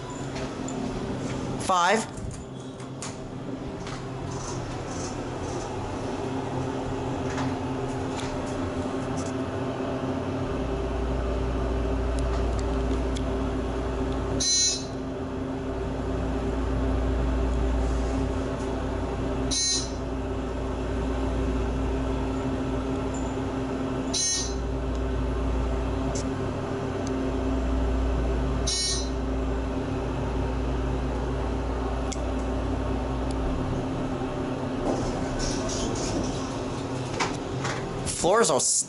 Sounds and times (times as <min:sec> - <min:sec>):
Speech: 0:01.6 - 0:02.1, 0:38.1 - 0:38.8.